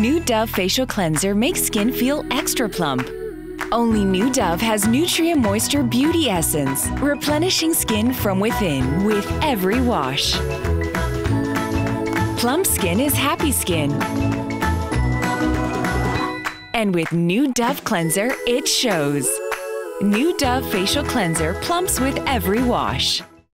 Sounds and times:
Speech: 0.0s - 3.1s, 3.7s - 10.4s, 12.4s - 14.0s, 16.8s - 19.4s, 20.0s - 23.2s
Music: 0.0s - 23.5s.

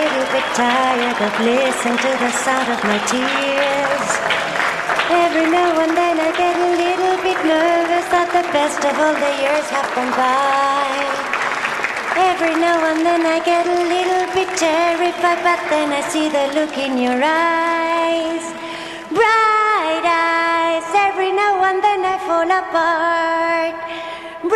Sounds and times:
Applause: 0.0s - 19.2s.

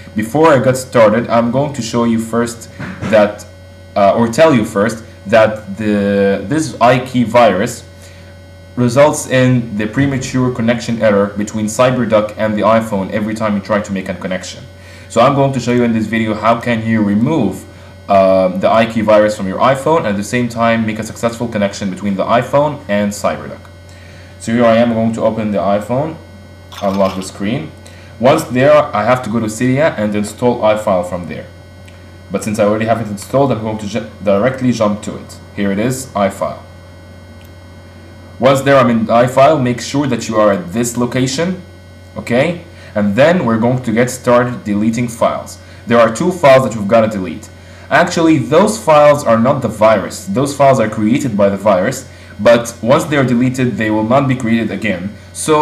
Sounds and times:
Speech: 0.1s - 7.9s, 8.8s - 23.7s, 24.4s - 31.6s, 32.3s - 36.7s, 38.4s - 55.6s.

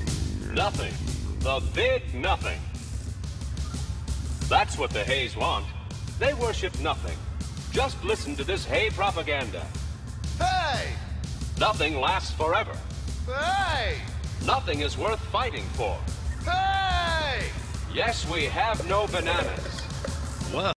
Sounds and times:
Music: 0.0s - 20.7s
Speech: 0.5s - 2.7s, 4.5s - 9.7s, 10.4s - 11.0s, 11.6s - 19.8s.

